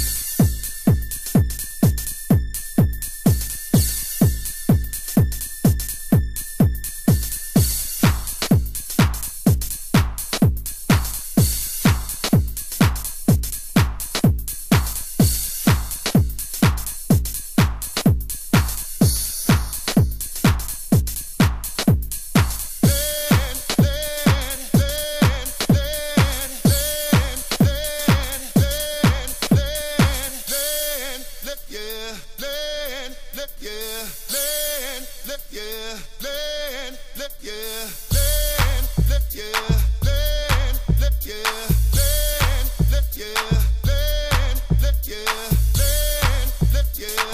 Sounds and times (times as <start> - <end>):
Music: 0.0 - 47.3.